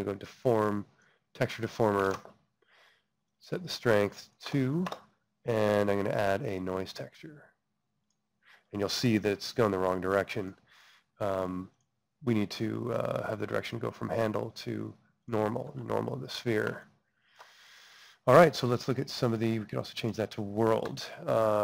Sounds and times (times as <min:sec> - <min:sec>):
Speech: 0:00.0 - 0:02.2, 0:03.4 - 0:07.5, 0:08.7 - 0:10.6, 0:11.2 - 0:16.9, 0:18.2 - 0:21.6.